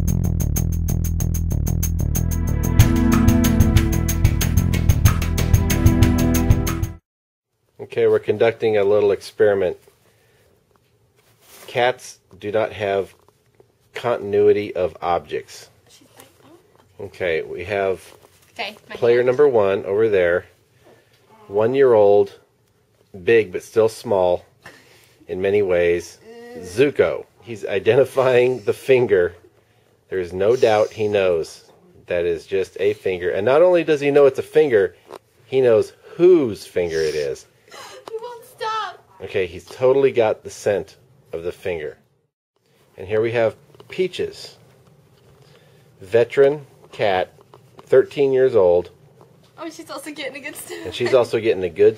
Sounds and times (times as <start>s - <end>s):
Speech: 7.8s - 9.8s, 30.1s - 34.9s, 35.6s - 37.5s.